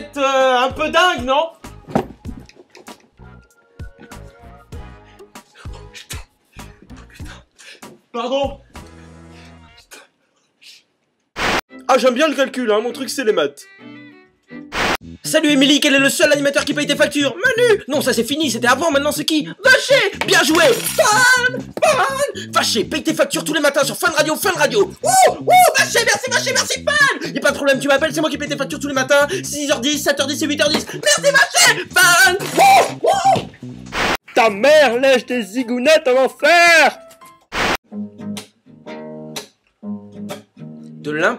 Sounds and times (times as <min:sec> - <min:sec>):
Speech: 0:00.0 - 0:01.6, 0:08.1 - 0:08.6, 0:11.9 - 0:13.7, 0:15.2 - 0:25.0, 0:25.7 - 0:32.6, 0:34.3 - 0:37.0, 0:41.0 - 0:41.3
Music: 0:00.0 - 0:10.0, 0:11.7 - 0:41.3.